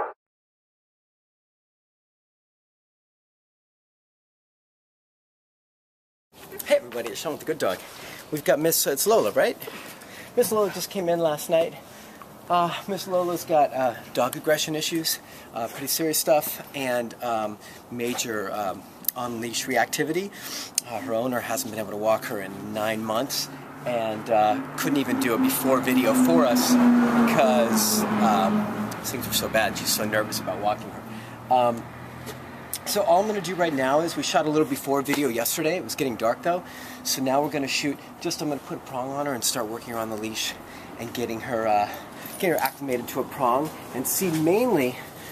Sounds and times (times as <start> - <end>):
Outside, urban or manmade: 6.3 - 45.3
Speech: 6.5 - 9.7, 10.4 - 11.8, 12.5 - 31.9, 32.8 - 45.1.